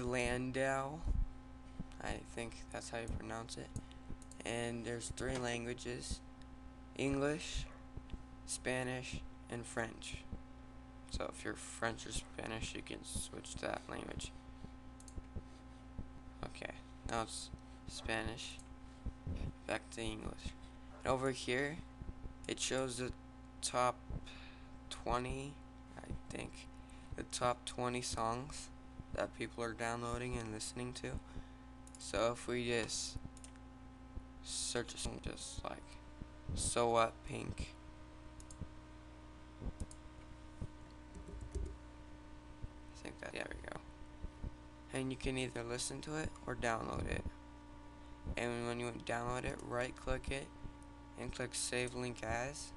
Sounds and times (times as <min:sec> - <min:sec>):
Speech: 0:00.0 - 0:01.2, 0:01.9 - 0:03.8, 0:04.4 - 0:06.3, 0:07.0 - 0:07.7, 0:08.5 - 0:10.3, 0:11.1 - 0:14.4, 0:16.4 - 0:18.6, 0:19.4 - 0:21.9, 0:22.5 - 0:24.1, 0:24.9 - 0:31.3, 0:32.0 - 0:33.3, 0:34.4 - 0:37.8, 0:43.0 - 0:43.9, 0:44.9 - 0:47.4, 0:48.3 - 0:50.6, 0:51.2 - 0:52.7.